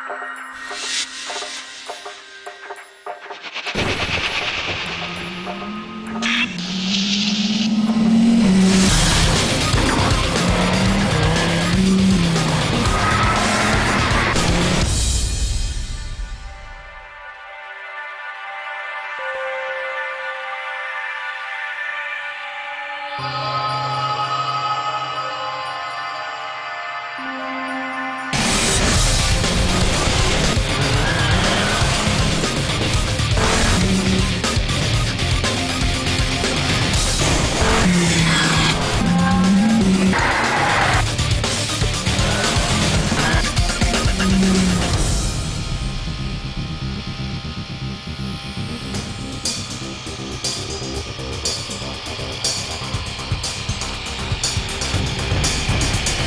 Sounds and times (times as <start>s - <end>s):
Music: 0.0s - 56.2s.